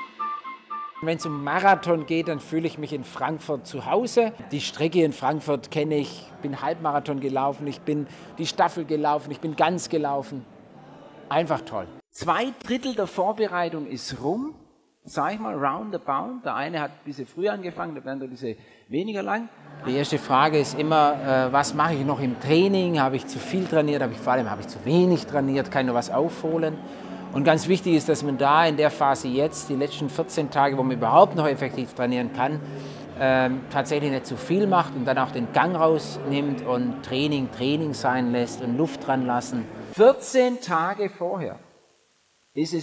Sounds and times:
Speech: 1.0 - 32.6, 33.2 - 41.6, 42.6 - 42.8
Inside, large room or hall: 1.0 - 41.6.

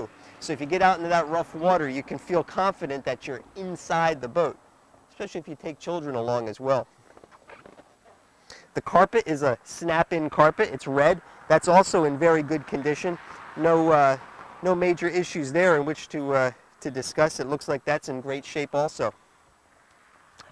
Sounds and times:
Speech: 0.0 - 6.9, 8.7 - 19.2.

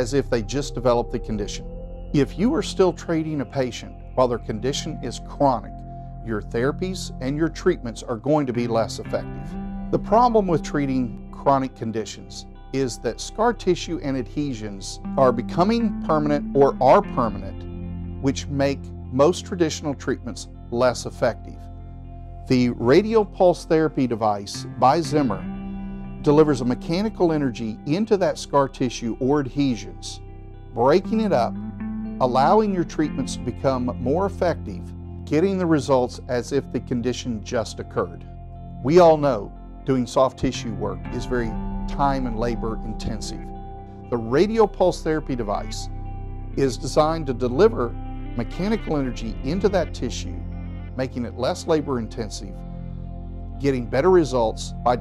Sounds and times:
Speech: 0.0 - 1.6, 2.2 - 5.7, 6.3 - 9.3, 10.0 - 17.6, 18.2 - 21.6, 22.5 - 25.5, 26.3 - 30.2, 30.8 - 31.5, 32.2 - 38.2, 38.8 - 43.5, 44.1 - 45.9, 46.6 - 50.4, 51.0 - 52.6, 53.6 - 55.0
Music: 0.0 - 55.0.

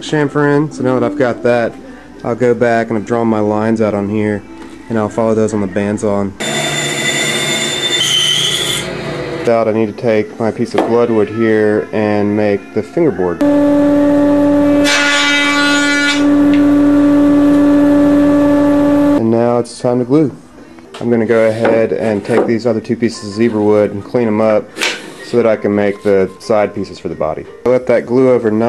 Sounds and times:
Music: 0.0 - 6.4, 9.5 - 28.6
Speech: 0.0 - 6.4, 9.5 - 13.4, 19.2 - 20.4, 21.0 - 28.6.

